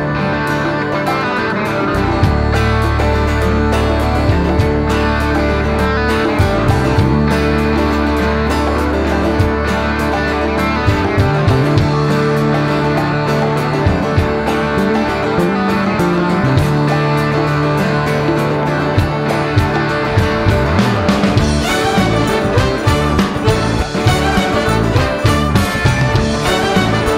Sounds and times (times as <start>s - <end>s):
Music: 0.0s - 27.1s.